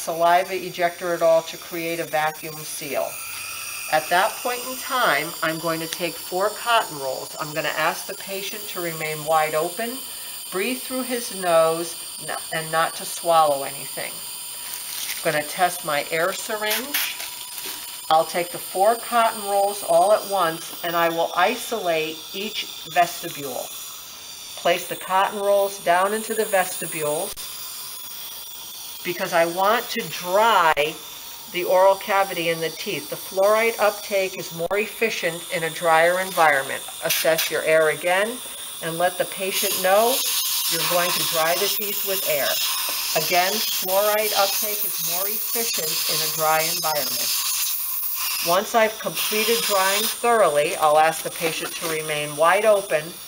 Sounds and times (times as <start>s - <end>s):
Electric toothbrush: 0.0s - 53.2s.